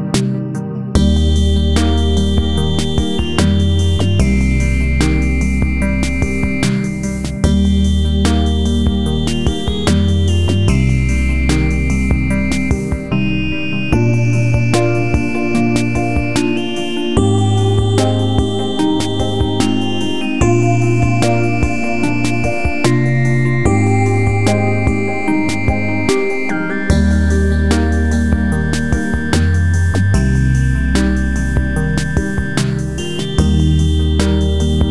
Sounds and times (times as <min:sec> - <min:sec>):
Music: 0:00.0 - 0:34.9.